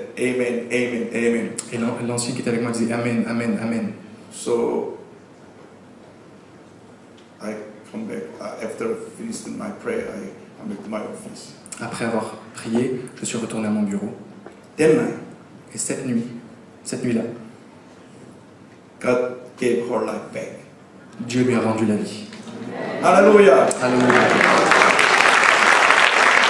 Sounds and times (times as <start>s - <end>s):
Male speech, man speaking: 0.0s - 5.0s, 7.4s - 14.2s, 14.8s - 17.4s, 19.0s - 22.3s, 23.0s - 24.4s.